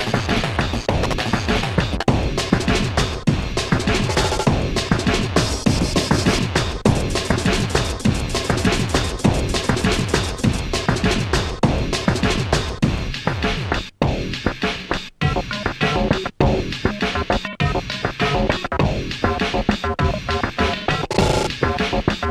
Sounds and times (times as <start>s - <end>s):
Bass drum: 0.0s - 14.6s, 18.8s - 20.3s
Drum kit: 0.0s - 22.3s.